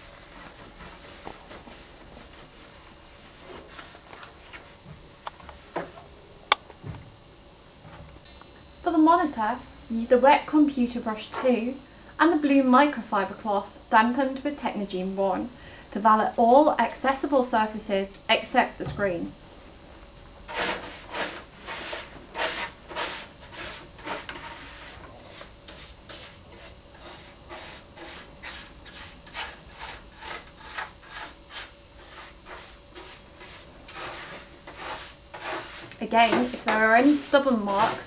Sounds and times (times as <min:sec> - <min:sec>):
Inside, small room: 0:00.0 - 0:38.0
Speech: 0:08.8 - 0:19.4, 0:36.0 - 0:38.0.